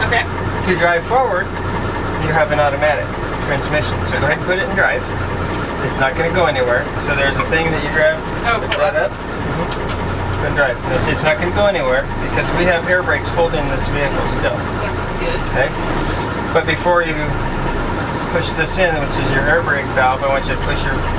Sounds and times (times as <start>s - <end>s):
Speech: 0.0s - 1.6s, 2.2s - 5.1s, 5.8s - 9.7s, 10.4s - 15.8s, 16.5s - 17.4s, 18.3s - 21.1s
Vehicle: 0.0s - 21.1s.